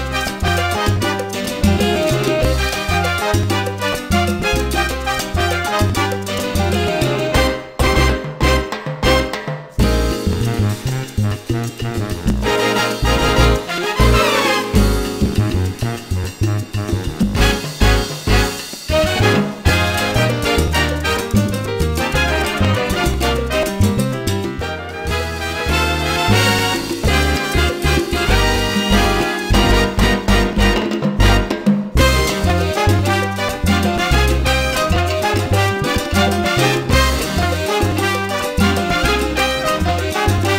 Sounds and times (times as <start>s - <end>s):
Music: 0.0s - 40.5s.